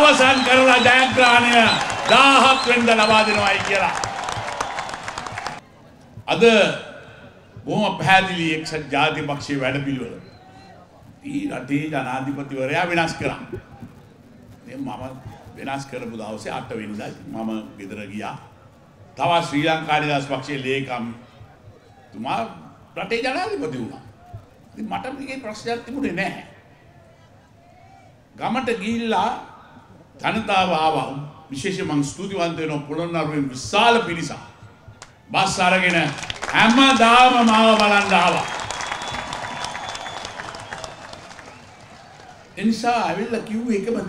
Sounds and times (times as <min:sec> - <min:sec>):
Male speech, man speaking: 0:00.0 - 0:04.1, 0:06.3 - 0:07.0, 0:07.6 - 0:13.8, 0:14.6 - 0:18.5, 0:19.2 - 0:21.2, 0:22.1 - 0:24.1, 0:24.8 - 0:26.6, 0:28.4 - 0:29.6, 0:30.2 - 0:34.6, 0:35.3 - 0:38.5, 0:42.6 - 0:44.0
Narration, monologue: 0:00.0 - 0:04.1, 0:05.9 - 0:26.7, 0:28.2 - 0:38.5, 0:42.5 - 0:44.0.